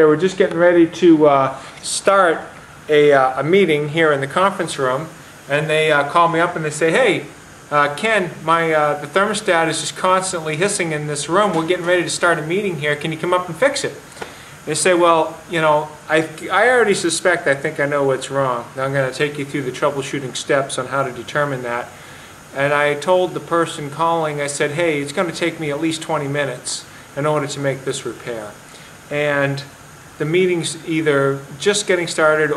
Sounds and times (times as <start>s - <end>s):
Speech: 0.0s - 32.5s.